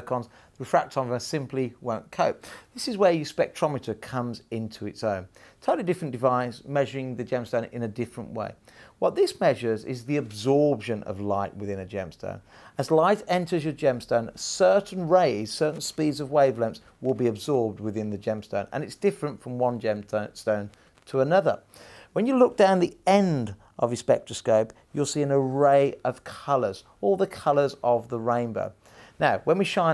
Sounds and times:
Speech: 0.0 - 21.6, 22.2 - 29.9.

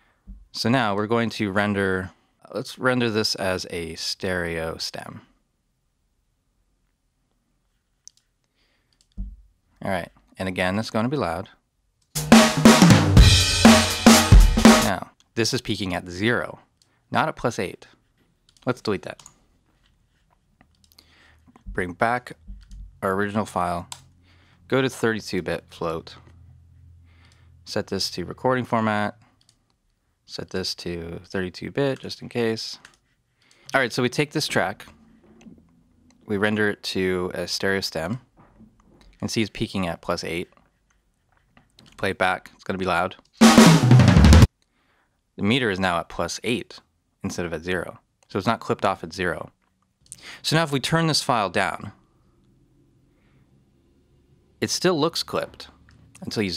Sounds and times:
Speech: 0.6 - 5.4, 9.8 - 11.6, 14.8 - 18.0, 18.6 - 19.3, 21.7 - 22.4, 23.0 - 24.0, 24.7 - 26.3, 27.7 - 29.2, 30.3 - 32.9, 33.7 - 35.0, 36.2 - 38.3, 39.2 - 40.6, 42.0 - 43.2, 45.4 - 49.6, 50.4 - 52.0, 54.6 - 56.5
Music: 12.2 - 14.9, 43.4 - 44.5.

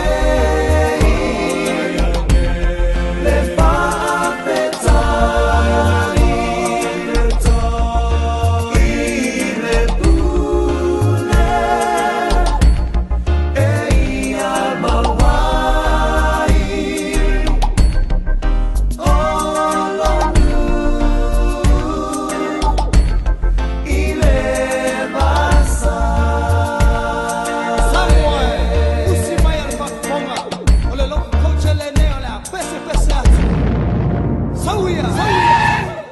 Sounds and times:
Reggae: 0.0 - 36.1.

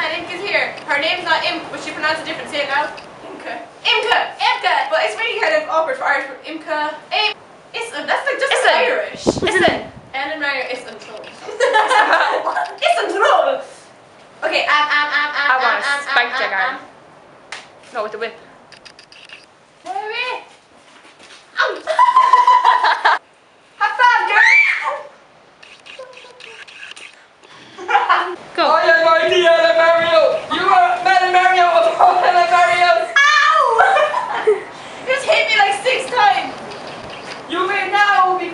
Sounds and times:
Laughter: 11.4 - 12.7, 21.8 - 23.2, 27.7 - 28.4, 33.7 - 34.7.

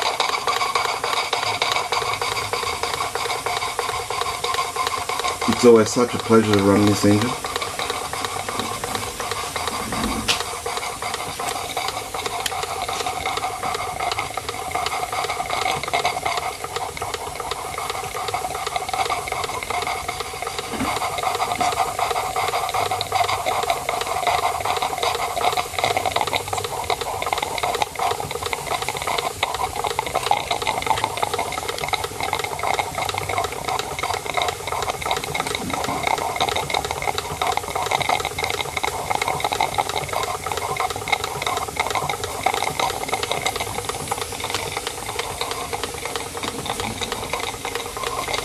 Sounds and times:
Engine: 0.0 - 48.4
Steam: 0.0 - 48.4.

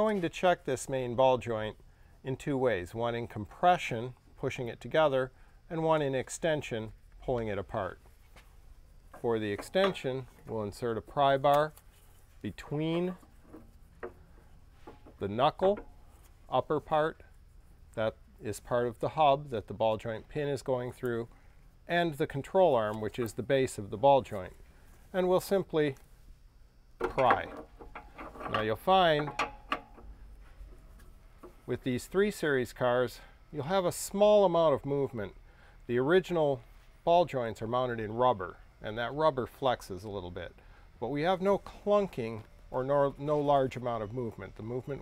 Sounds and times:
Speech: 0.0 - 8.0, 9.2 - 11.8, 12.4 - 13.2, 15.2 - 15.8, 16.5 - 17.3, 18.0 - 21.3, 21.9 - 26.0, 27.0 - 27.6, 28.5 - 29.3, 31.7 - 45.0.

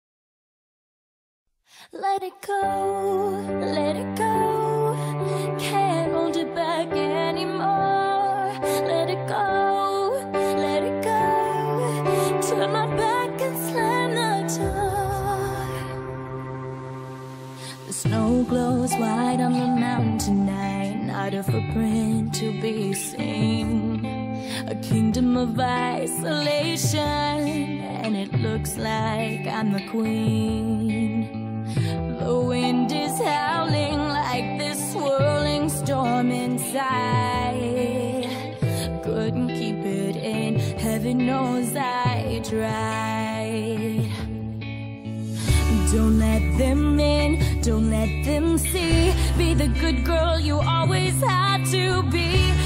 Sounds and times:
Music: 1.7 - 52.6.

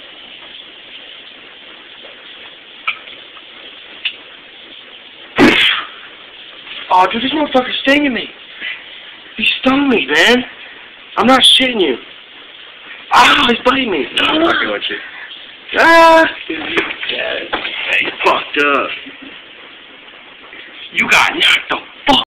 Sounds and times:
Speech: 6.9 - 8.3, 13.1 - 15.0, 20.9 - 22.2.

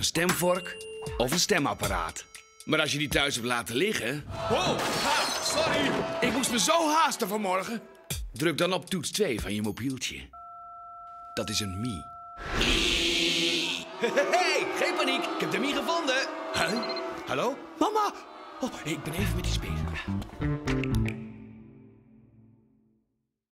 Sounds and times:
Music: 0.0 - 4.4, 7.6 - 10.3, 19.0 - 23.2
Speech: 0.0 - 7.8, 8.4 - 10.3, 11.4 - 12.1, 14.0 - 20.1.

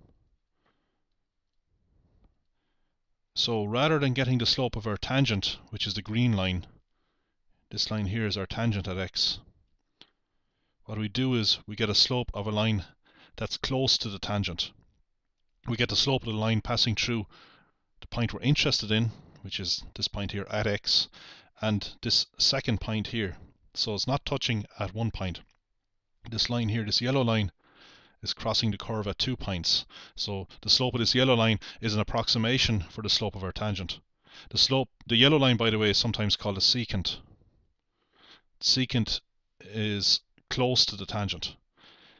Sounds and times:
Speech: 3.4 - 6.8, 7.7 - 9.5, 10.8 - 14.8, 15.6 - 17.3, 18.0 - 25.5, 26.2 - 27.6, 28.2 - 37.3, 38.6 - 41.6.

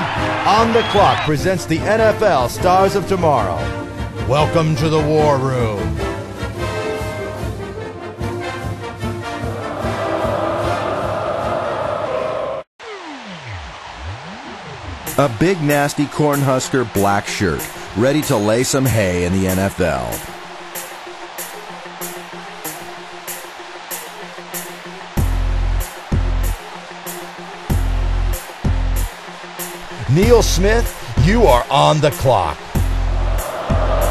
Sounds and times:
Music: 0.0 - 34.1
Speech: 0.4 - 3.7, 4.3 - 6.0, 15.2 - 20.3, 30.0 - 32.6.

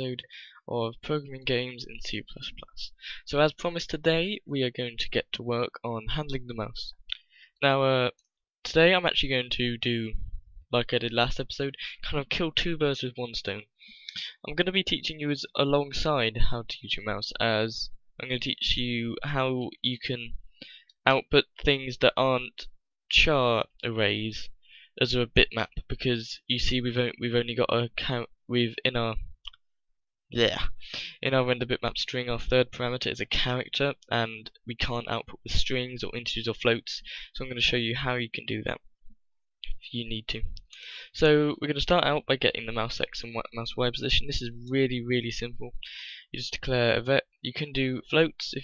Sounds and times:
Speech: 0.0 - 20.4, 21.1 - 29.5, 30.4 - 38.8, 39.6 - 48.6.

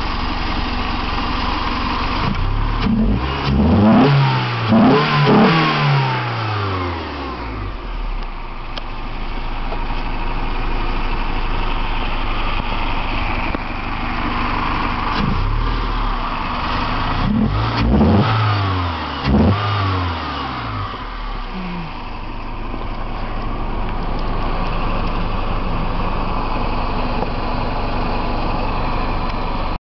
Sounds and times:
Car: 0.0 - 29.8
Idling: 0.0 - 29.8
Medium engine (mid frequency): 0.0 - 29.8.

